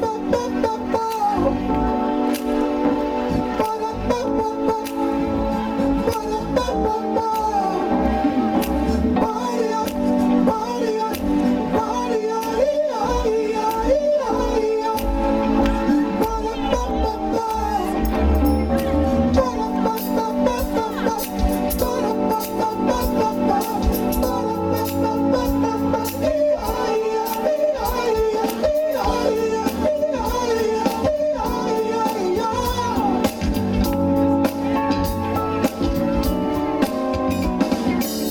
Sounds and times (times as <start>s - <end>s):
Music: 0.0s - 38.3s.